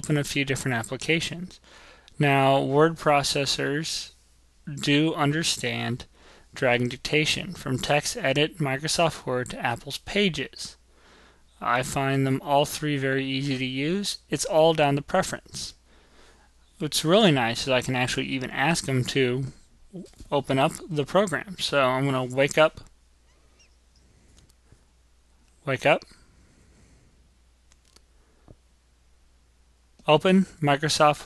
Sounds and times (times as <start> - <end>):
Speech: 0.0 - 1.6, 2.2 - 10.8, 11.6 - 15.8, 16.8 - 22.9, 25.6 - 26.2, 30.0 - 31.2.